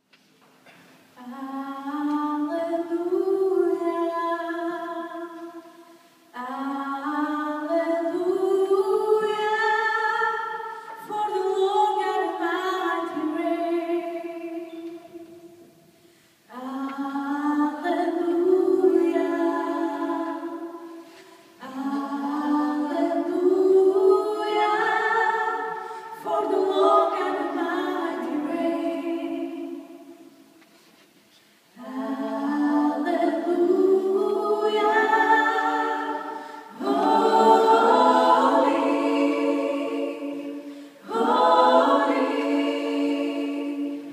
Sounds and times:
Choir: 0:01.2 - 0:15.8, 0:16.5 - 0:30.6, 0:31.8 - 0:44.1.

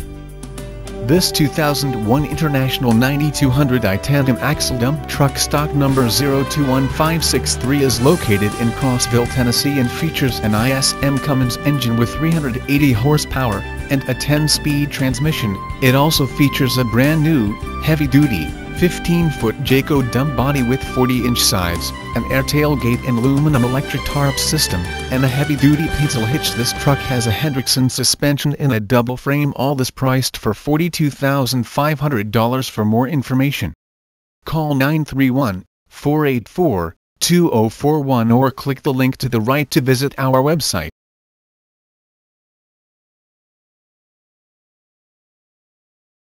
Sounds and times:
Speech: 0:01.0 - 0:33.8, 0:34.5 - 0:41.0.

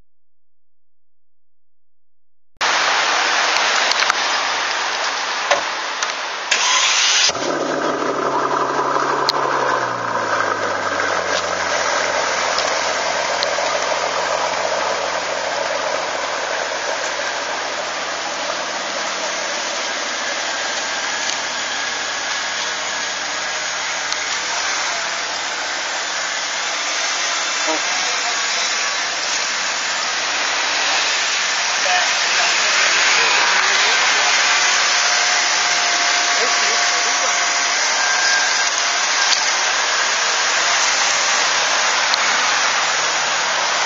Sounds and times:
Outside, urban or manmade: 0:02.6 - 0:43.8
Speech: 0:27.6 - 0:28.8, 0:31.8 - 0:34.3, 0:36.4 - 0:37.4.

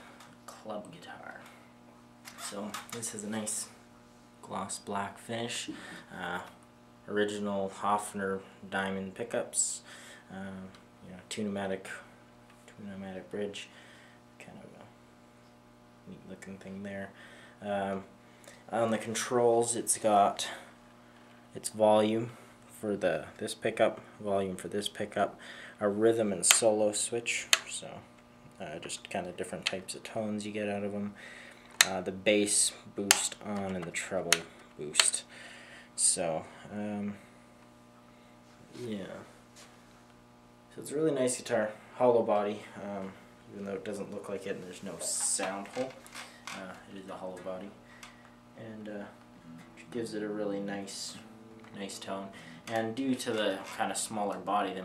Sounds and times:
Speech: 0:00.5 - 0:01.6, 0:02.4 - 0:03.8, 0:04.4 - 0:12.1, 0:12.7 - 0:13.7, 0:14.4 - 0:15.0, 0:16.0 - 0:18.1, 0:18.7 - 0:20.7, 0:21.6 - 0:31.2, 0:31.8 - 0:35.3, 0:36.0 - 0:37.3, 0:38.7 - 0:39.4, 0:40.7 - 0:47.8, 0:48.6 - 0:49.2, 0:49.8 - 0:54.8.

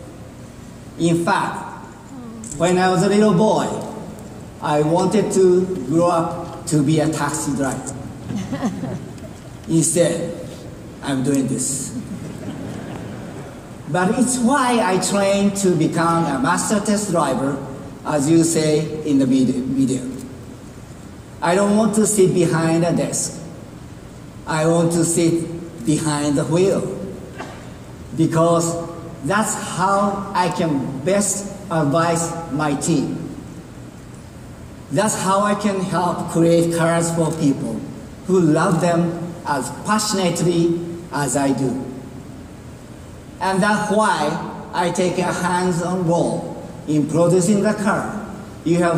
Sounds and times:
Narration, monologue: 0:00.0 - 0:48.9
Male speech, man speaking: 0:01.0 - 0:01.8, 0:02.6 - 0:04.0, 0:04.6 - 0:08.0, 0:09.7 - 0:10.4, 0:11.0 - 0:12.0, 0:13.9 - 0:20.2, 0:21.4 - 0:23.4, 0:24.5 - 0:27.0, 0:28.2 - 0:33.2, 0:34.9 - 0:41.9, 0:43.4 - 0:48.9.

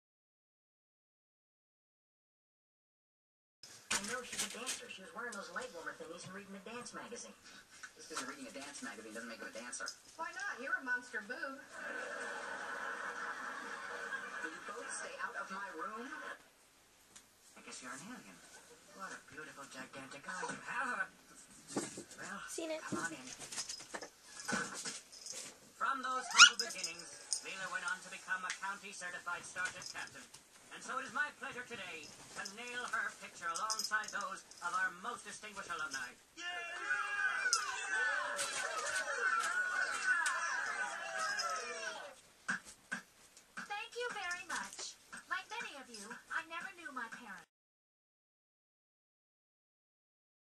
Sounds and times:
Inside, small room: 0:03.6 - 0:47.5
Speech: 0:03.9 - 0:07.4, 0:08.0 - 0:11.7, 0:22.2 - 0:23.4, 0:25.8 - 0:38.9, 0:43.7 - 0:47.5
Bow-wow: 0:26.2 - 0:26.6
Yip: 0:26.2 - 0:26.6.

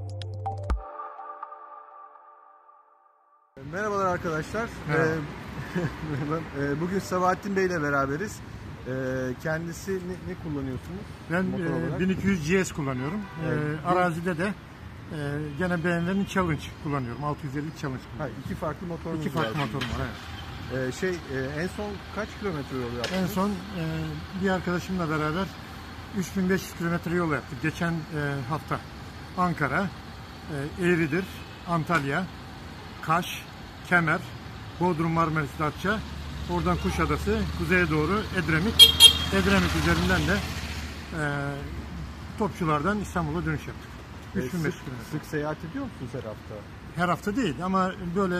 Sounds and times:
Speech: 0:03.6 - 0:05.3, 0:06.1 - 0:25.5, 0:26.2 - 0:28.8, 0:30.5 - 0:32.3, 0:33.0 - 0:40.5, 0:41.1 - 0:41.8, 0:42.4 - 0:48.3.

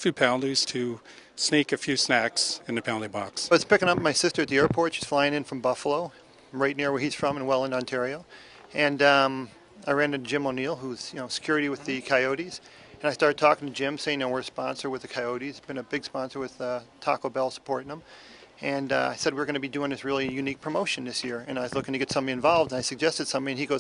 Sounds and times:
Speech: 0:00.0 - 0:18.0, 0:18.6 - 0:23.8.

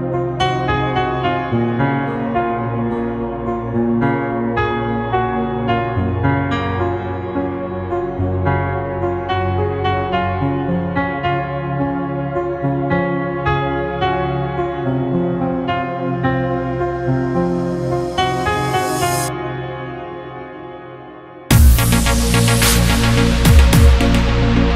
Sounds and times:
New-age music: 0:00.0 - 0:24.7.

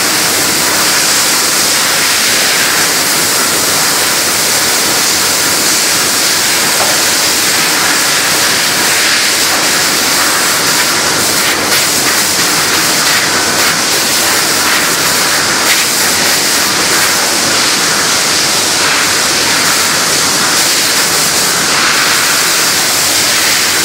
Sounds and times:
Spray: 0:00.0 - 0:23.8.

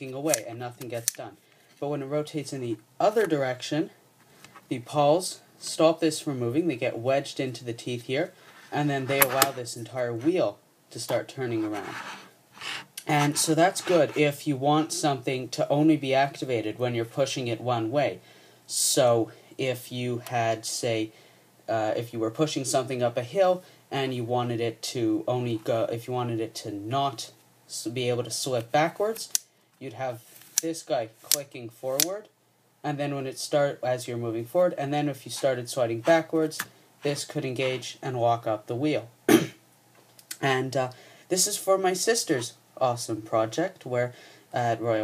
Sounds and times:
Speech: 0:00.0 - 0:04.0, 0:04.7 - 0:12.0, 0:13.0 - 0:39.4, 0:40.3 - 0:45.0.

